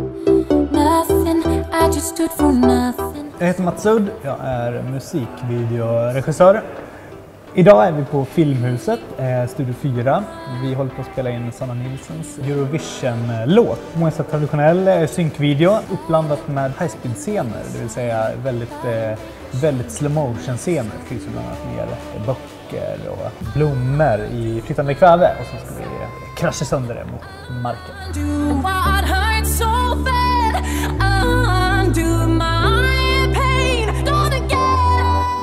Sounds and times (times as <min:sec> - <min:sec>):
Music: 0:00.0 - 0:35.4
Speech: 0:03.4 - 0:06.7, 0:07.6 - 0:28.0.